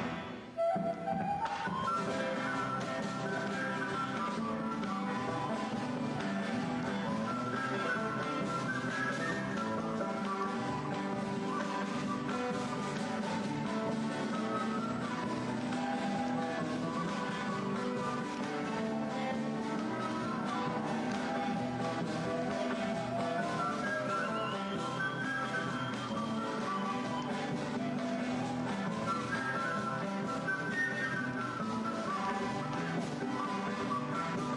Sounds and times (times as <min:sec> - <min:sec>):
Background music: 0:00.0 - 0:34.5.